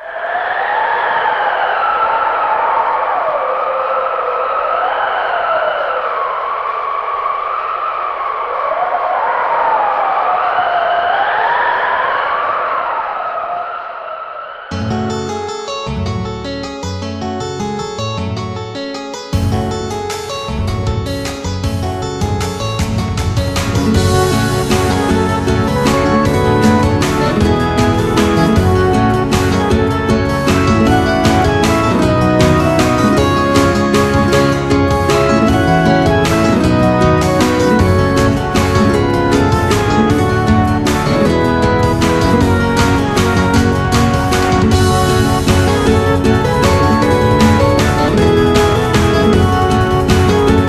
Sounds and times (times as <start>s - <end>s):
Music: 14.7s - 50.6s.